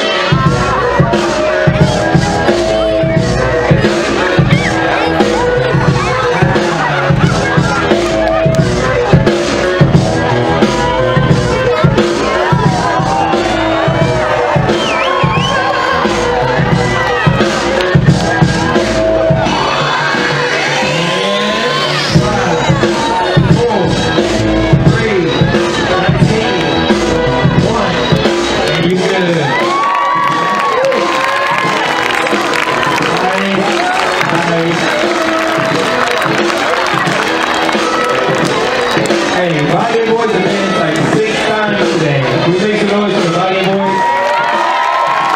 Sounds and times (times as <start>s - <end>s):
Music: 0.0s - 45.3s.